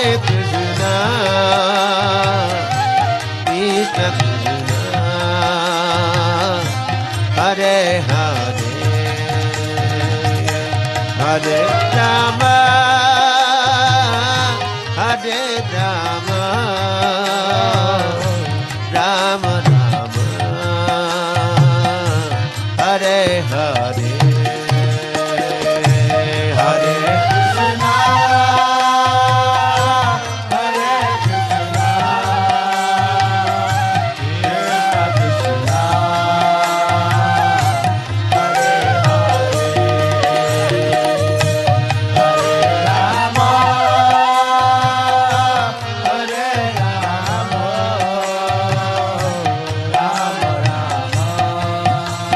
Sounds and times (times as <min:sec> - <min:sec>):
Mantra: 0:00.0 - 0:37.6, 0:42.2 - 0:52.3.